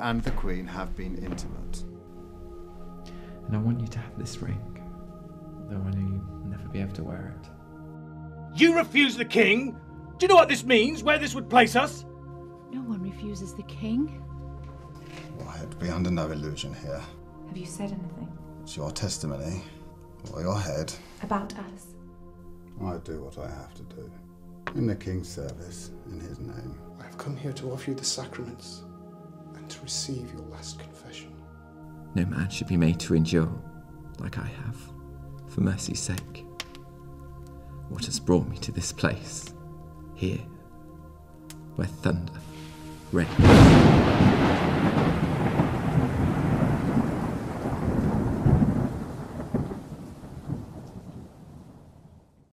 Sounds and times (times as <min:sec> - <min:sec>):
Rain: 0:42.4 - 0:52.5
Thunder: 0:43.2 - 0:52.5.